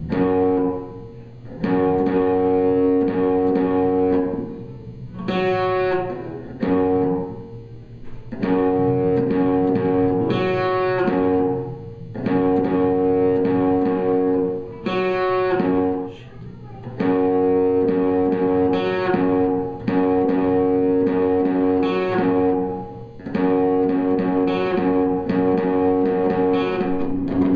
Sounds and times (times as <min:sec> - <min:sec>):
Electric guitar: 0:00.0 - 0:27.5
Strum: 0:00.0 - 0:27.5
Speech: 0:15.9 - 0:17.0.